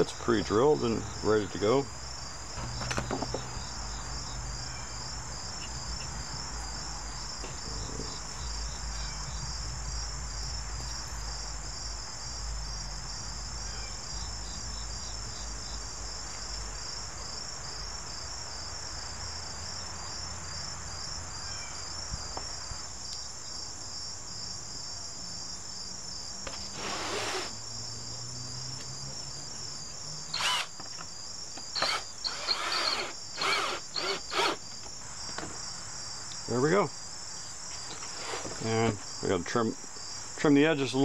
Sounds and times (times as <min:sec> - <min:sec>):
Cricket: 0:00.0 - 0:41.0.